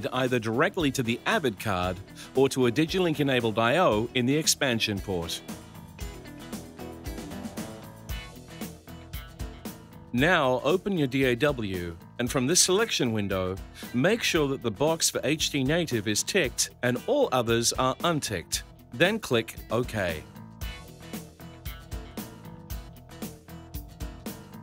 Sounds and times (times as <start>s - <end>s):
Speech: 0.0s - 5.4s, 10.2s - 20.3s
Music: 0.0s - 24.6s.